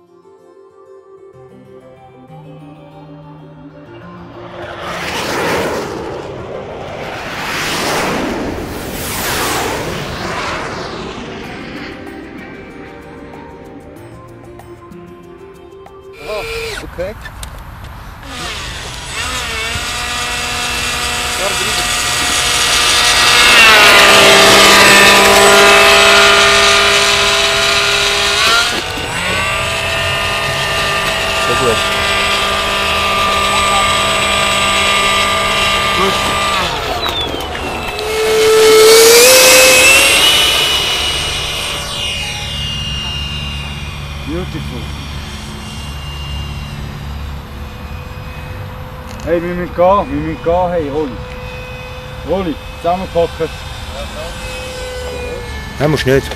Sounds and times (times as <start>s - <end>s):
Outside, urban or manmade: 0.0s - 56.3s
Fixed-wing aircraft, airplane: 3.9s - 56.3s.